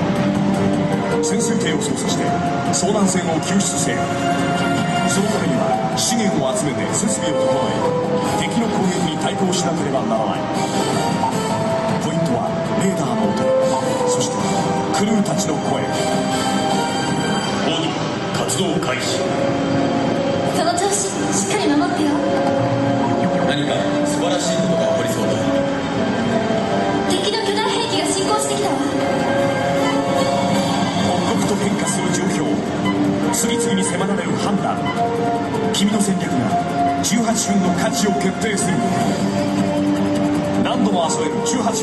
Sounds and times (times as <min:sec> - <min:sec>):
Music: 0:00.0 - 0:41.8
Speech: 0:08.4 - 0:10.5, 0:23.2 - 0:25.5, 0:31.1 - 0:32.6, 0:33.3 - 0:34.9, 0:35.8 - 0:39.0, 0:40.6 - 0:41.8.